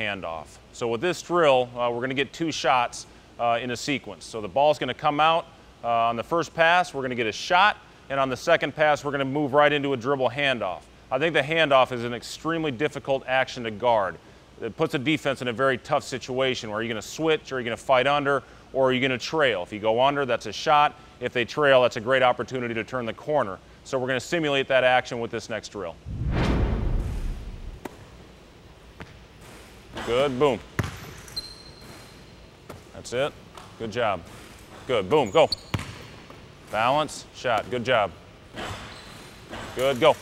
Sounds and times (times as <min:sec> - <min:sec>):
Speech: 0:00.0 - 0:26.0, 0:30.0 - 0:30.7, 0:32.9 - 0:35.6, 0:36.7 - 0:38.2, 0:39.7 - 0:40.2.